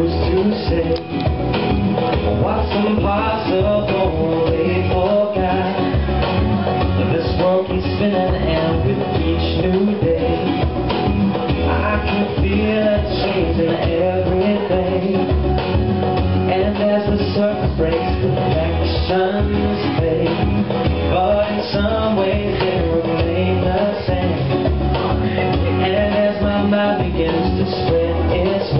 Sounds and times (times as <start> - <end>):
Male singing: 0.0 - 1.2, 2.4 - 10.8, 11.6 - 15.7, 16.4 - 28.7
Music: 0.0 - 28.7.